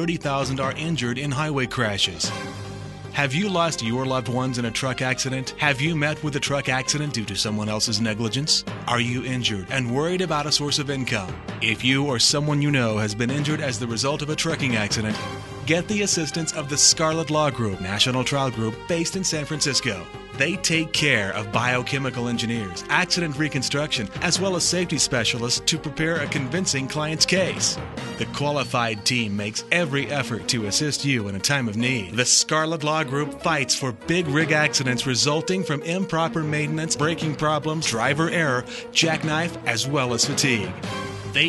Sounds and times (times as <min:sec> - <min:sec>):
Speech: 0:00.0 - 0:02.4, 0:03.1 - 0:40.8
Music: 0:00.0 - 0:41.4.